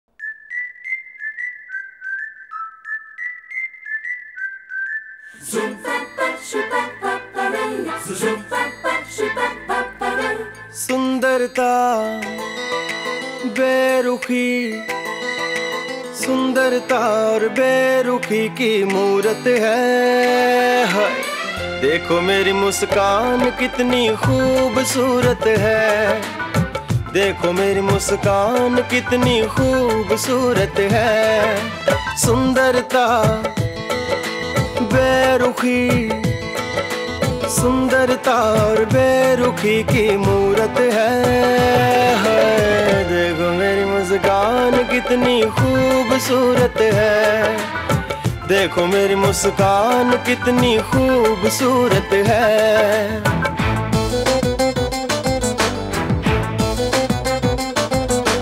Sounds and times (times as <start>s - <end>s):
Singing: 5.4s - 12.3s, 27.1s - 33.6s, 37.5s - 53.3s.